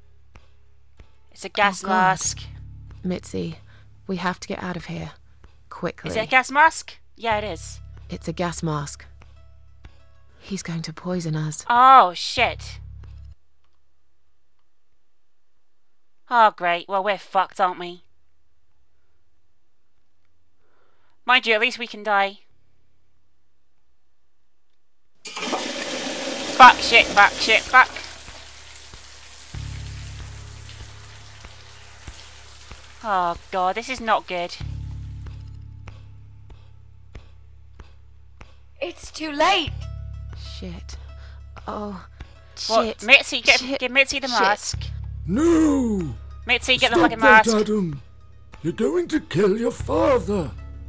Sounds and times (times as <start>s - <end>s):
Speech: 1.4s - 9.1s, 10.4s - 12.8s, 16.3s - 18.1s, 26.6s - 28.1s, 33.0s - 34.6s, 38.8s - 39.7s, 41.7s - 48.0s, 48.6s - 50.6s.